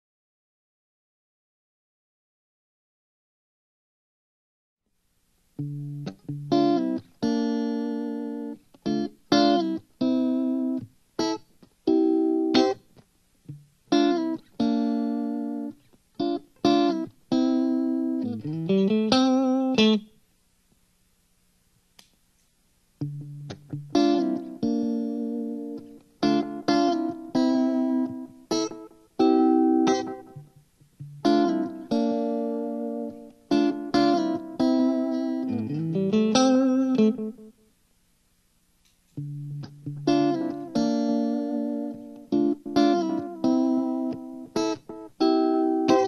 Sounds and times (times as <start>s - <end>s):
Distortion: 4.8s - 46.0s
Effects unit: 4.9s - 20.9s, 22.9s - 46.0s
Guitar: 5.4s - 20.8s, 22.0s - 37.8s, 38.8s - 46.0s.